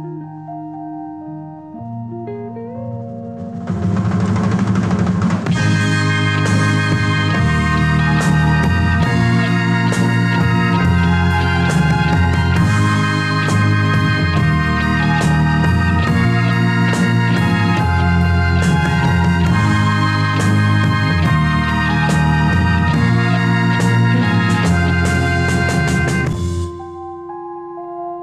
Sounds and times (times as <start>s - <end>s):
Music: 0.0s - 28.2s.